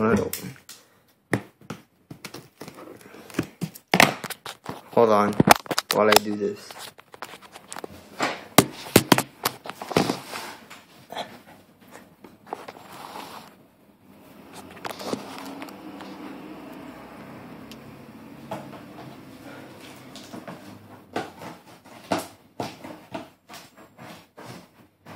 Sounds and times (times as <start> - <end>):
Speech: 0.0 - 0.6, 5.0 - 6.8.